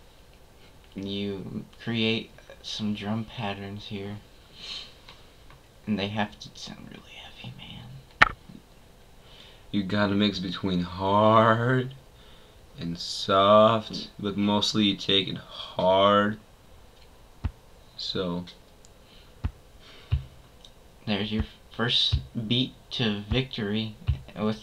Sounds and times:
Speech: 0:01.0 - 0:04.3, 0:05.9 - 0:08.1, 0:09.8 - 0:12.0, 0:12.8 - 0:16.4, 0:18.0 - 0:18.6, 0:21.0 - 0:24.6.

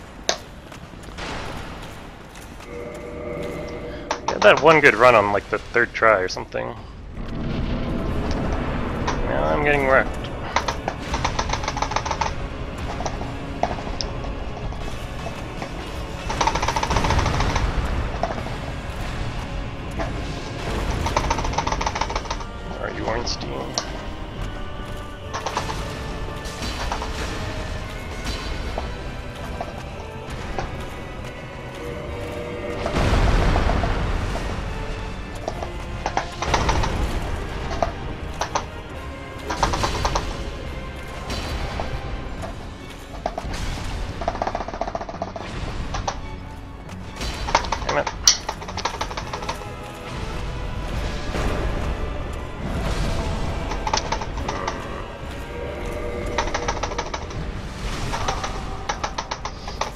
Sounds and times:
Speech: 0:04.3 - 0:06.8, 0:09.2 - 0:10.1, 0:22.8 - 0:23.7.

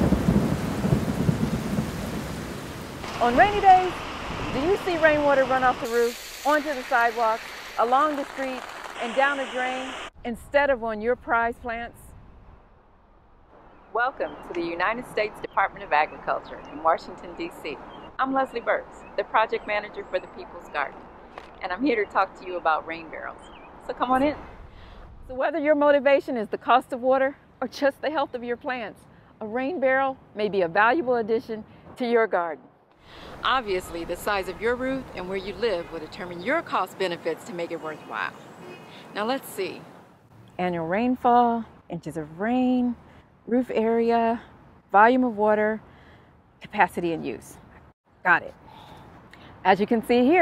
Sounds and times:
Speech: 0:03.2 - 0:04.0, 0:04.6 - 0:12.0, 0:14.0 - 0:20.9, 0:21.6 - 0:24.4, 0:25.3 - 0:32.6, 0:33.4 - 0:38.4, 0:39.1 - 0:39.8, 0:40.6 - 0:44.4, 0:45.0 - 0:45.8, 0:46.6 - 0:47.6, 0:48.3 - 0:48.6, 0:49.6 - 0:50.4.

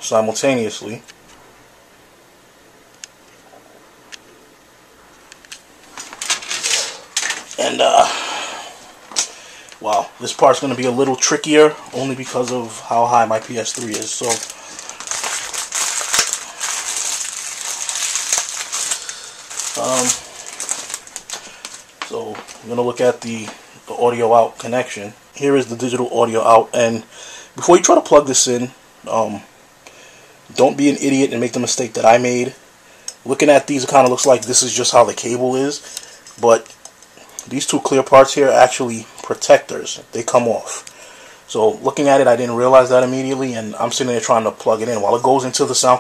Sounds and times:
Speech: 0:00.0 - 0:01.1, 0:07.6 - 0:08.2, 0:09.8 - 0:14.5, 0:19.8 - 0:20.2, 0:22.1 - 0:29.5, 0:30.5 - 0:32.6, 0:33.2 - 0:35.8, 0:36.4 - 0:36.8, 0:37.4 - 0:40.9, 0:41.5 - 0:46.0
Inside, small room: 0:00.0 - 0:46.0.

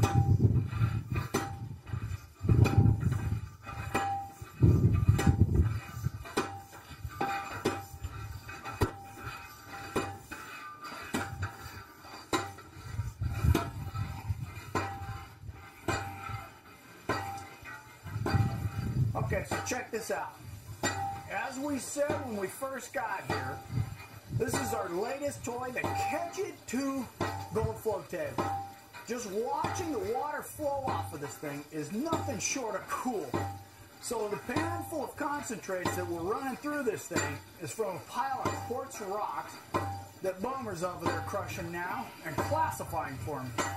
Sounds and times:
Speech: 0:19.2 - 0:20.4, 0:21.3 - 0:23.7, 0:24.4 - 0:28.5, 0:29.1 - 0:33.4, 0:34.0 - 0:39.6, 0:40.2 - 0:43.6.

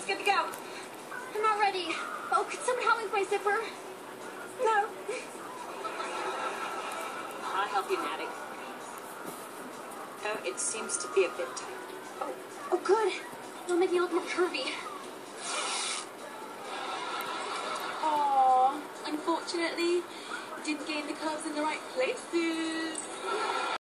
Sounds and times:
Music: 0:00.0 - 0:23.8
Zipper (clothing): 0:15.4 - 0:16.1.

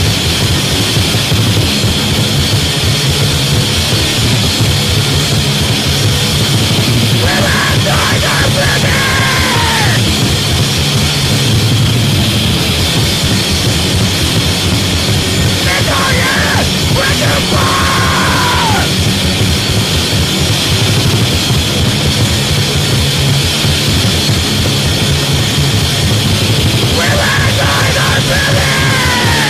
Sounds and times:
Cacophony: 0:00.0 - 0:29.5
Music: 0:00.0 - 0:29.5.

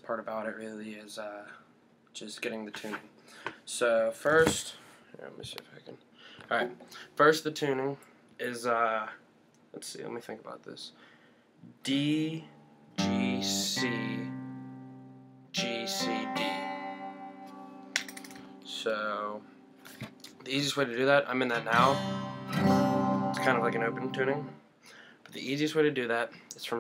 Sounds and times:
Speech: 0:00.0 - 0:01.6, 0:02.2 - 0:03.1, 0:03.7 - 0:11.0, 0:11.8 - 0:12.5, 0:18.7 - 0:19.4, 0:20.4 - 0:22.0, 0:23.4 - 0:24.5, 0:25.3 - 0:26.8
Music: 0:12.9 - 0:20.2, 0:21.5 - 0:24.6.

